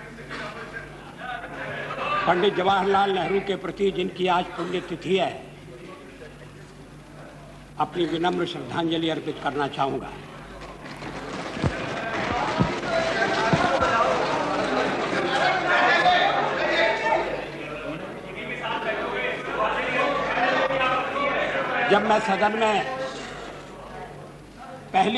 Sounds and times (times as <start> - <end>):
Male speech, man speaking: 0.0 - 6.5, 7.8 - 10.2, 15.3 - 25.1
Narration, monologue: 2.3 - 10.6.